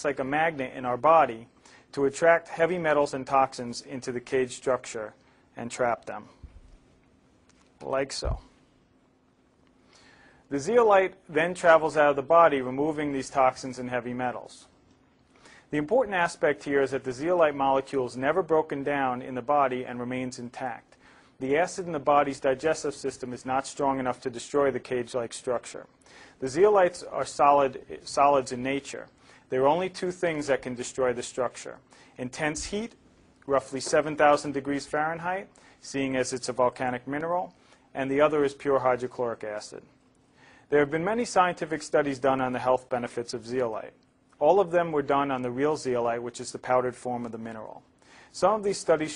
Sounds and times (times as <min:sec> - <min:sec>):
Speech: 0:00.0 - 0:06.4, 0:07.8 - 0:08.5, 0:10.5 - 0:14.8, 0:15.7 - 0:40.0, 0:40.7 - 0:49.1.